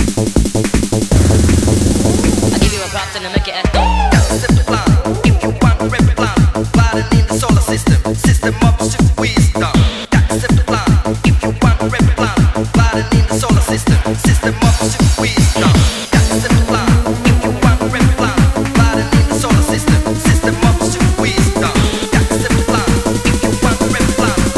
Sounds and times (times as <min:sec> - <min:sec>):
Techno: 0:00.0 - 0:24.5.